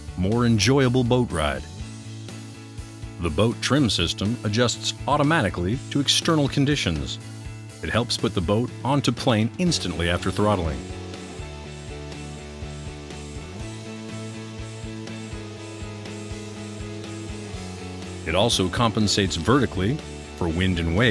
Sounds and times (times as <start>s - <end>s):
Music: 0.0s - 21.1s
Speech: 0.2s - 1.7s, 3.2s - 7.2s, 7.8s - 10.9s, 18.2s - 21.1s.